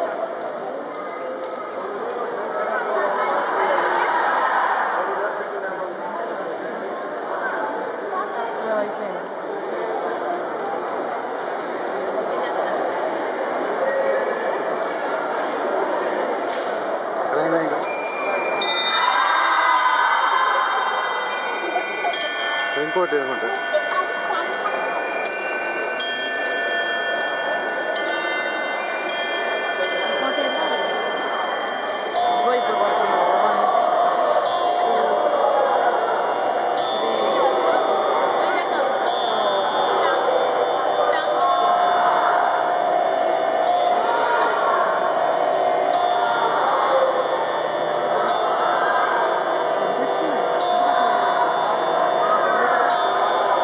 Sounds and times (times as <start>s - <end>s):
Speech: 0.0s - 53.6s.